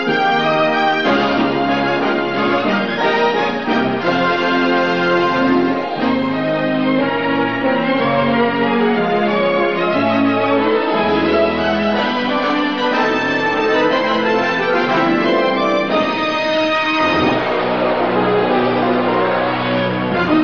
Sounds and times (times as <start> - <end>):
Music: 0.0 - 20.4.